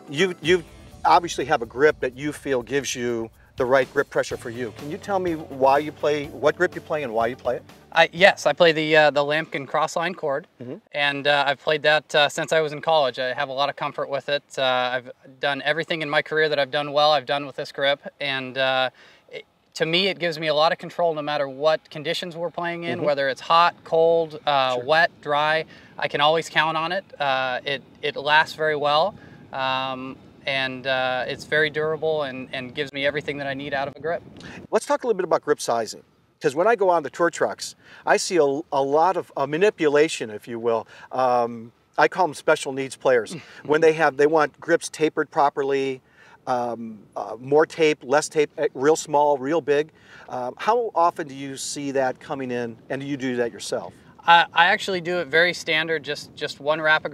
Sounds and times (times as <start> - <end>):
Speech: 0.0 - 57.1.